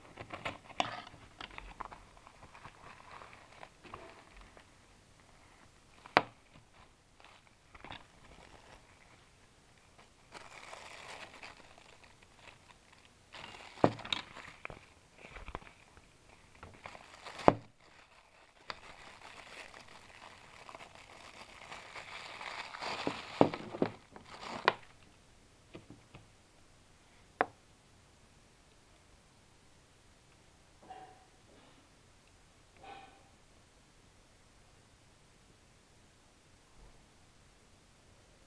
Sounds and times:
Crumpling, crinkling: 0.0 - 25.2
Inside, small room: 0.0 - 38.4.

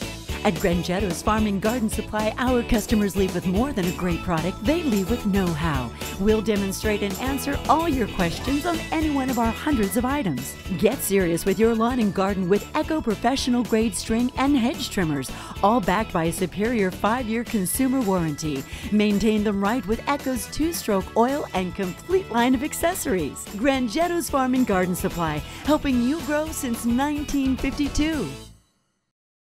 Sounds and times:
Music: 0.0 - 29.2
Speech: 0.4 - 28.4.

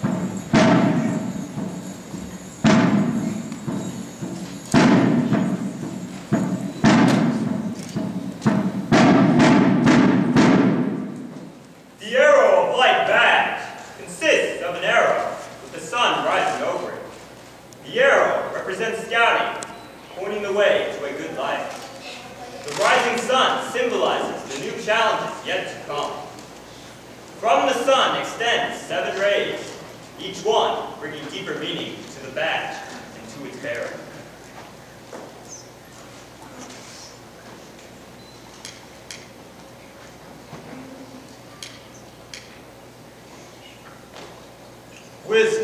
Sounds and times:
Music: 0.0 - 10.6
Thump, thud: 0.1 - 1.2, 2.7 - 3.8, 4.8 - 5.6, 6.4 - 11.2
Speech: 12.0 - 17.1, 17.9 - 26.4, 27.4 - 34.3, 45.3 - 45.6.

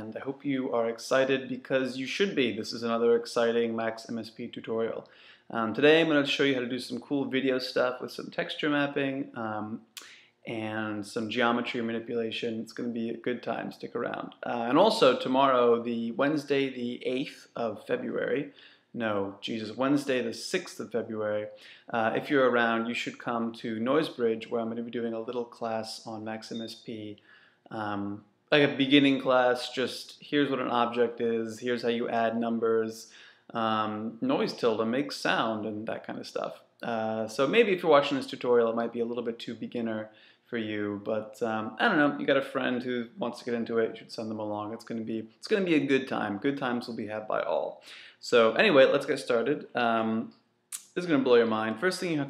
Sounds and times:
Speech: 0.0 - 52.2.

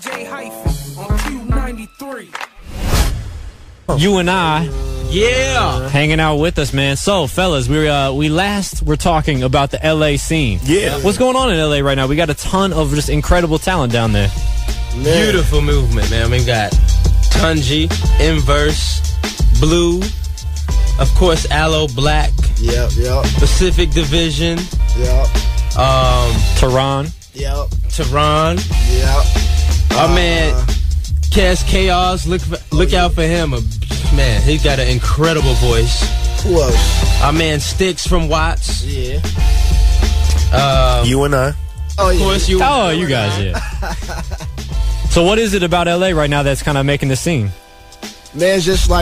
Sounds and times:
Music: 0.0 - 49.0
Speech: 3.9 - 14.3, 15.0 - 20.1, 21.0 - 29.3, 29.9 - 39.3, 40.4 - 43.8, 45.1 - 47.6, 48.4 - 49.0.

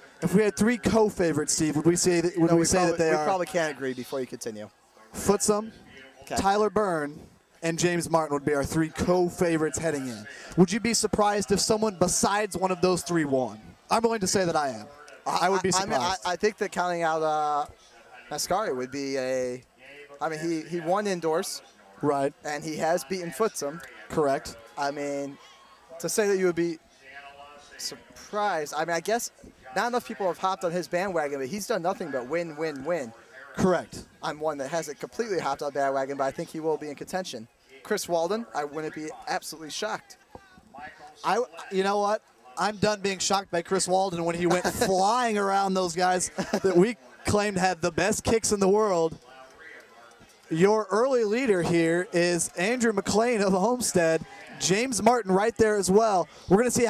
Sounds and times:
Speech: 0.0 - 56.8.

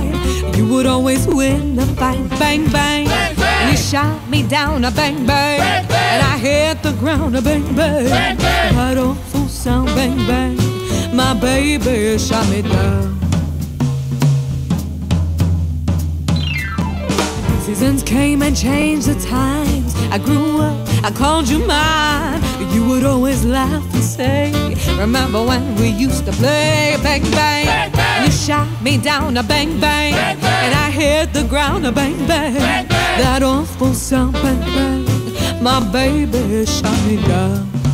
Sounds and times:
Music: 0.0 - 37.9.

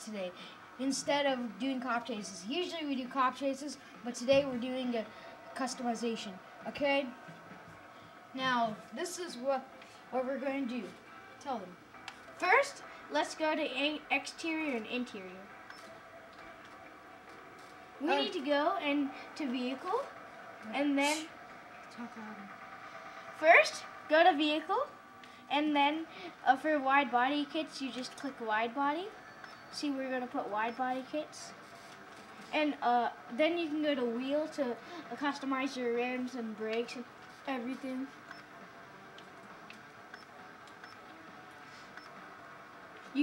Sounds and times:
Speech: 0.0 - 7.1, 8.4 - 9.6, 18.0 - 21.3, 23.4 - 24.9, 25.5 - 29.1, 29.8 - 31.5, 32.5 - 38.1.

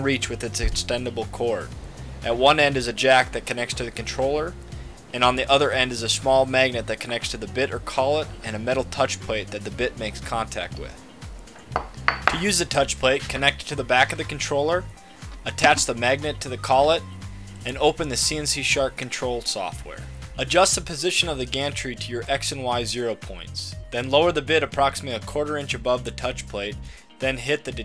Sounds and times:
Speech: 0.0 - 11.0, 12.4 - 14.9, 15.5 - 17.0, 17.6 - 27.8
Music: 0.0 - 27.8.

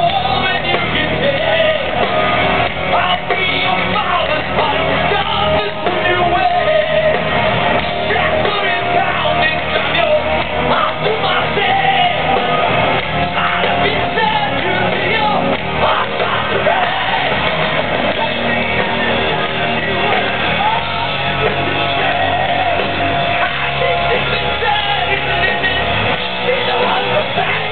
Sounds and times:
Music: 0.0 - 27.7.

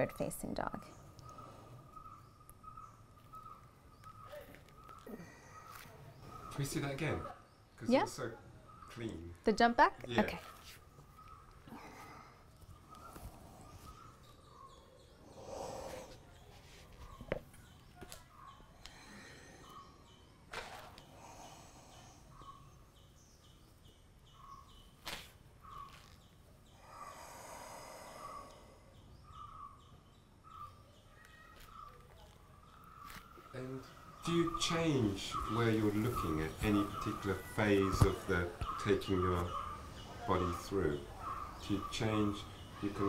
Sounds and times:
Environmental noise: 0.0 - 43.0.

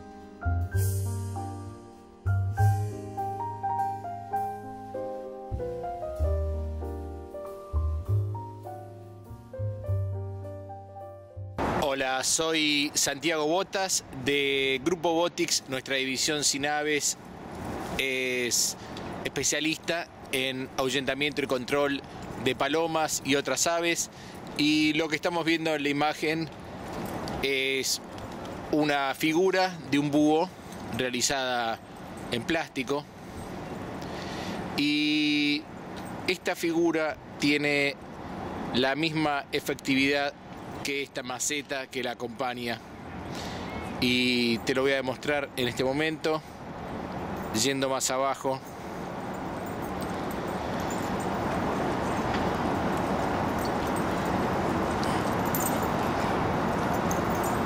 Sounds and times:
Outside, urban or manmade: 0.0 - 57.6
Speech: 11.8 - 17.2, 18.0 - 26.5, 27.4 - 28.0, 28.7 - 33.1, 34.8 - 35.6, 36.3 - 38.0, 38.8 - 42.8, 44.0 - 46.4, 47.5 - 48.6.

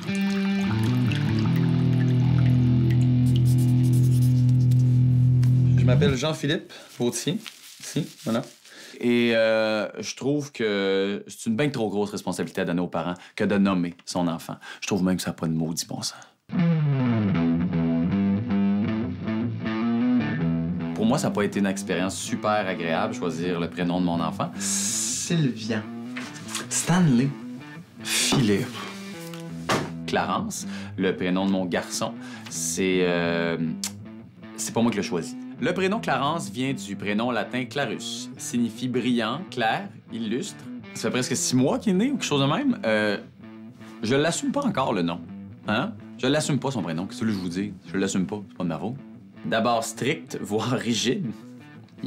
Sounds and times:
Music: 0.0 - 6.5, 16.5 - 52.0
Speech: 5.8 - 16.3, 21.0 - 25.9, 26.5 - 27.4, 28.1 - 28.8, 30.1 - 34.0, 34.6 - 43.3, 44.0 - 51.4.

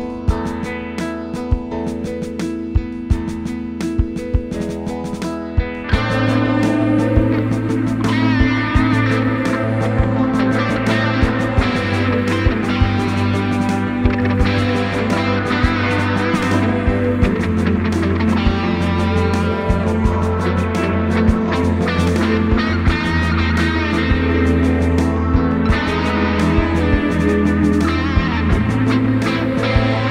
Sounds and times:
Bass guitar: 0.0 - 30.1.

